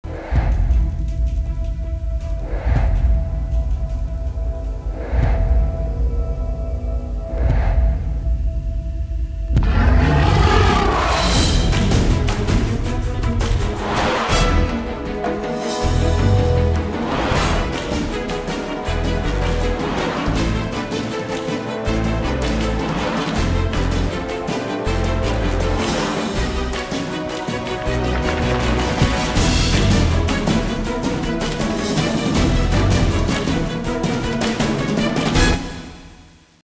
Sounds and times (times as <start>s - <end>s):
Music: 0.0s - 36.6s.